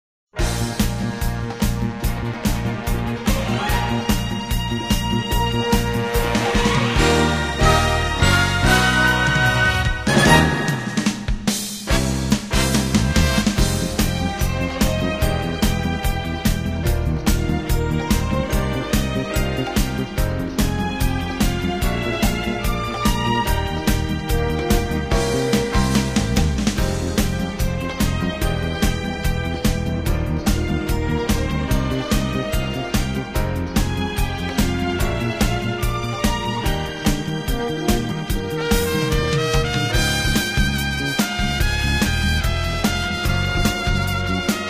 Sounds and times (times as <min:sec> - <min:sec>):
Music: 0:00.3 - 0:44.7.